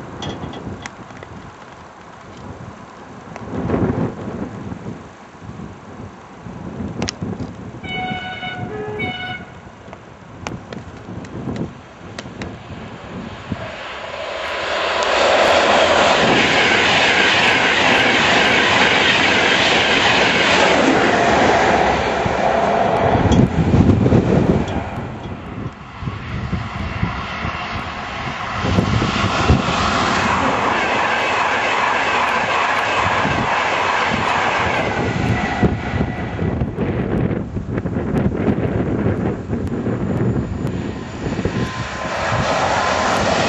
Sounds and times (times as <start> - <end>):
Outside, rural or natural: 0.0 - 43.4
Railroad car, train wagon: 0.0 - 43.4
Train: 0.0 - 43.4.